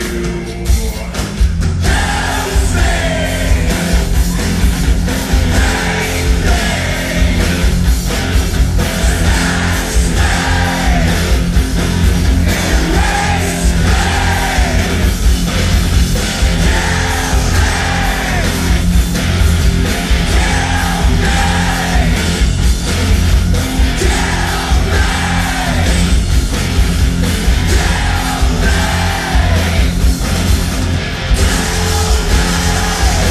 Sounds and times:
Inside, large room or hall: 0.0 - 33.3
Music: 0.0 - 33.3.

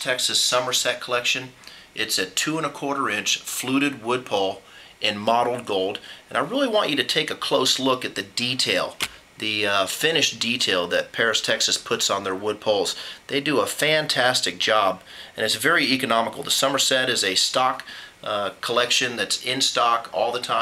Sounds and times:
Speech: 0.0 - 20.6.

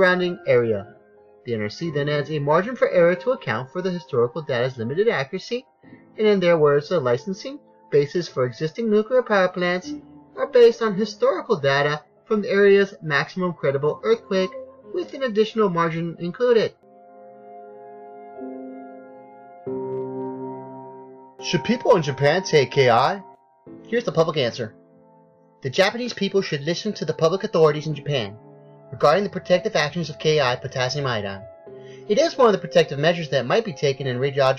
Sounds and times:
Piano: 0.0 - 34.5.

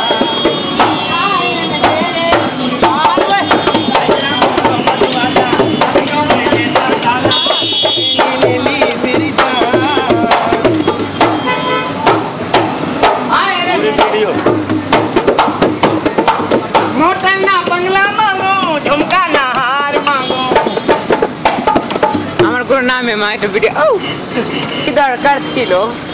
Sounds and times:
Music: 0.0 - 22.7
Outside, urban or manmade: 0.0 - 26.1.

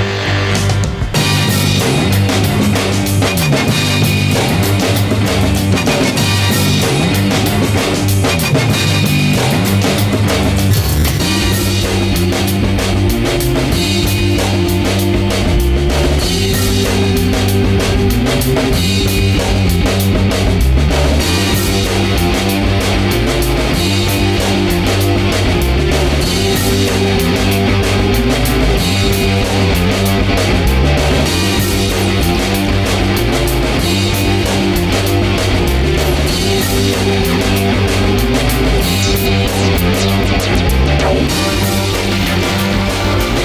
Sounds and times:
Music: 0.0 - 43.4.

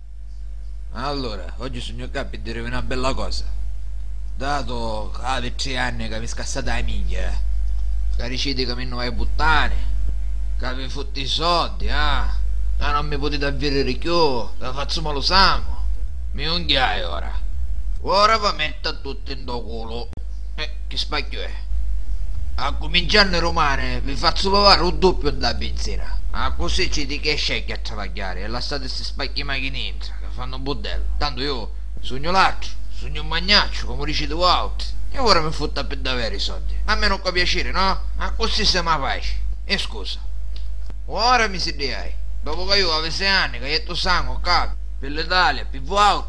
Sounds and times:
Male speech, man speaking: 0.9 - 3.6, 4.4 - 7.4, 8.2 - 9.9, 10.6 - 17.4, 18.0 - 21.6, 22.6 - 40.3, 41.1 - 46.2.

